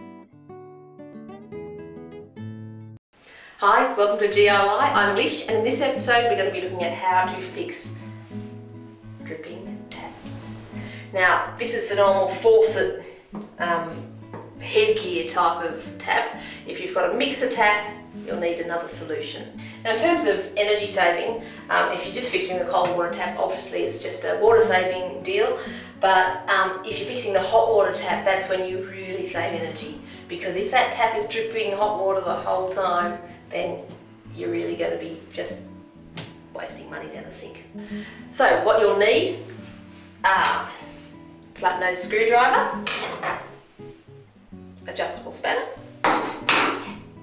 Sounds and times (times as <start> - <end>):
Music: 0.0 - 47.2
Speech: 3.6 - 8.0, 9.2 - 14.0, 14.6 - 35.7, 36.6 - 37.7, 38.3 - 39.5, 40.2 - 40.8, 41.6 - 42.8, 44.8 - 45.8.